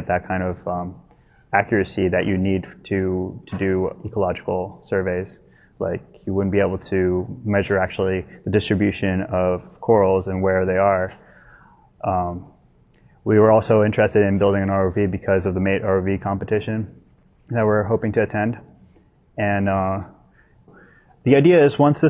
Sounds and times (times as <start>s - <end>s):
Speech: 0.0s - 11.2s, 12.0s - 12.5s, 13.3s - 18.7s, 19.4s - 20.2s, 21.2s - 22.1s.